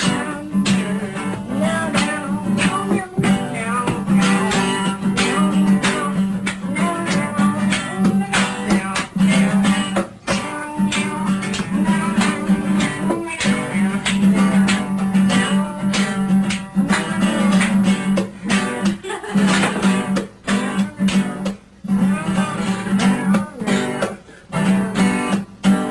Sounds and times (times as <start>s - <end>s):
Music: 0.0s - 25.9s.